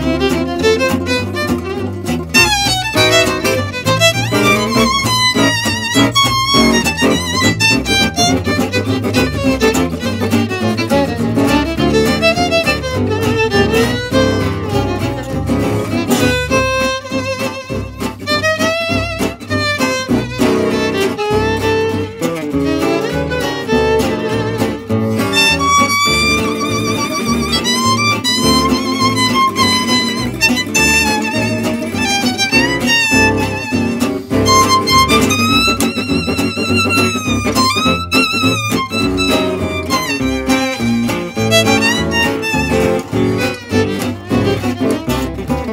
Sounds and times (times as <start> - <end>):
Acoustic guitar: 0.0 - 45.7
Flamenco: 0.0 - 45.7.